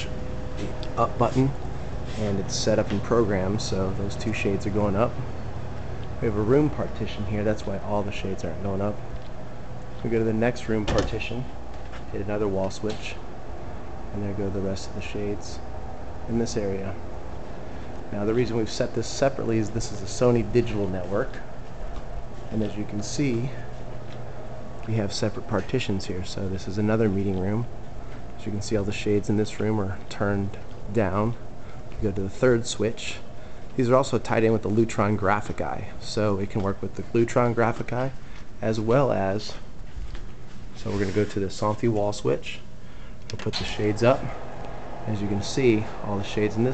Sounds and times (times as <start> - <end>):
Speech: 0.0 - 5.3, 6.2 - 9.0, 10.0 - 13.2, 14.1 - 15.7, 16.3 - 17.0, 18.1 - 21.5, 22.5 - 23.8, 24.8 - 27.7, 28.4 - 31.4, 32.0 - 39.6, 40.8 - 42.7, 43.3 - 44.4, 45.0 - 46.7.